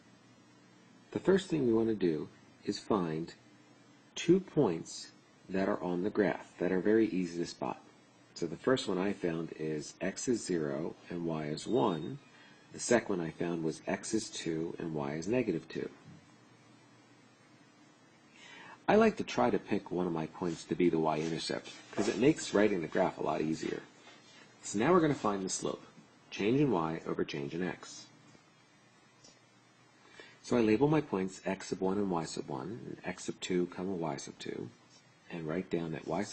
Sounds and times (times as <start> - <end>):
Speech: 1.1 - 3.4, 4.1 - 16.1, 18.8 - 24.0, 24.6 - 28.2, 30.4 - 36.3.